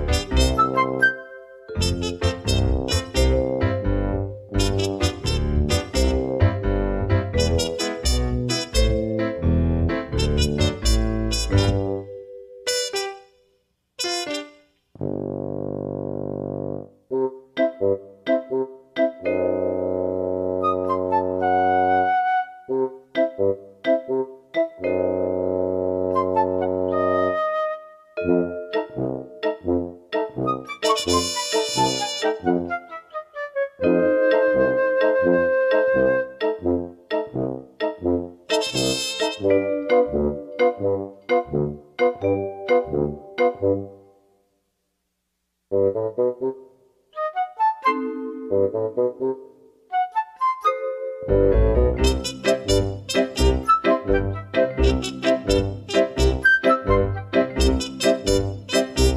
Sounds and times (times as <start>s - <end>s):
Music: 0.0s - 44.4s, 45.7s - 59.1s.